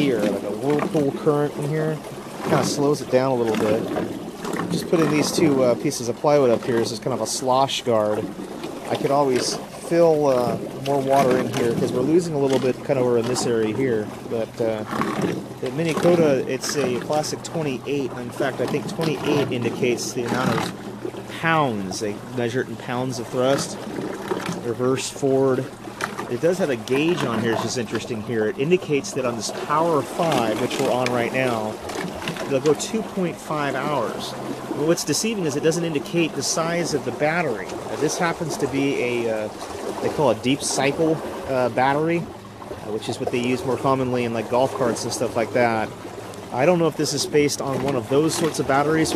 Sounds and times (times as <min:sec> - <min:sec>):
Speech: 0:00.0 - 0:03.9, 0:04.7 - 0:08.3, 0:08.9 - 0:14.9, 0:15.6 - 0:20.7, 0:21.3 - 0:23.8, 0:24.6 - 0:25.7, 0:26.3 - 0:31.8, 0:32.4 - 0:42.3, 0:42.9 - 0:45.9, 0:46.5 - 0:49.1.